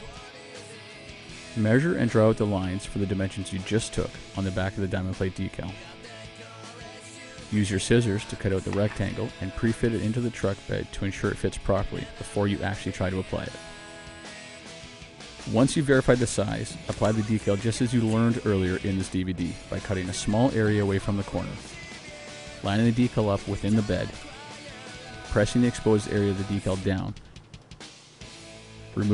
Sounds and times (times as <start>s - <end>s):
Music: 0.0s - 29.1s
Speech: 1.6s - 5.9s, 7.5s - 13.6s, 15.5s - 21.7s, 22.6s - 24.2s, 25.2s - 27.2s.